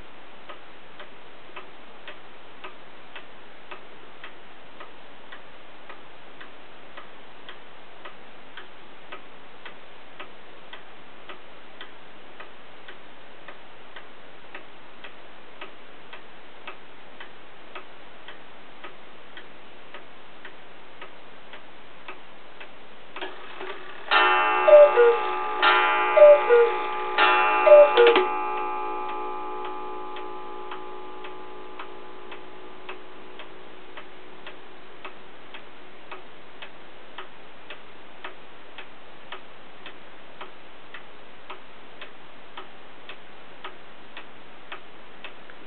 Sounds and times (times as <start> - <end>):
Tick-tock: 0.5 - 26.8, 27.7 - 45.6.